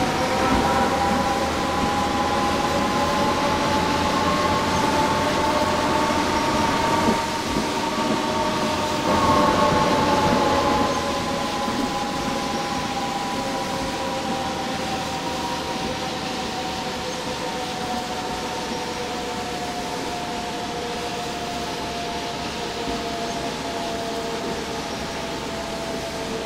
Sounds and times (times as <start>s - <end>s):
Vehicle: 0.0s - 26.4s.